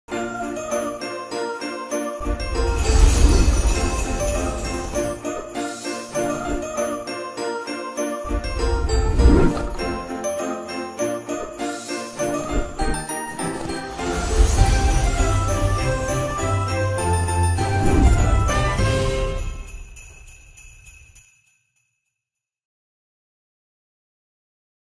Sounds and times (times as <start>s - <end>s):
Christian music: 0.1s - 19.9s
Christmas music: 0.1s - 21.6s
Jingle bell: 0.1s - 22.2s.